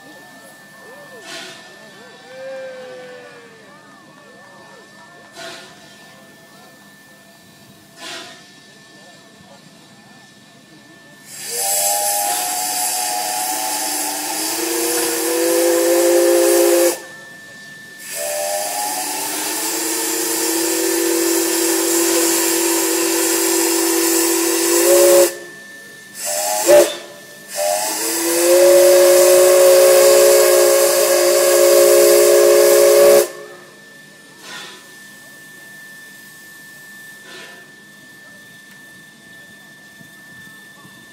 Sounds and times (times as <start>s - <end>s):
Hiss: 7.7s - 10.0s, 11.1s - 38.2s
Steam whistle: 11.2s - 41.1s.